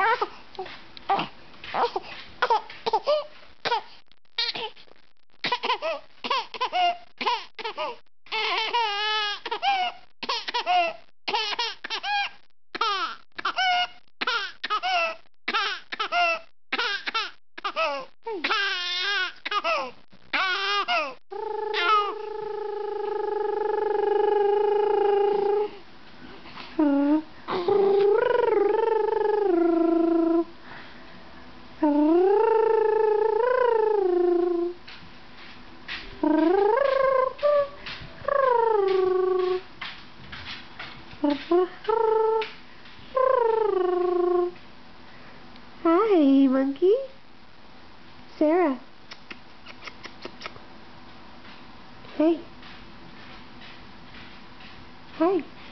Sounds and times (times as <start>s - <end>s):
Crying, sobbing: 17.6s - 25.8s.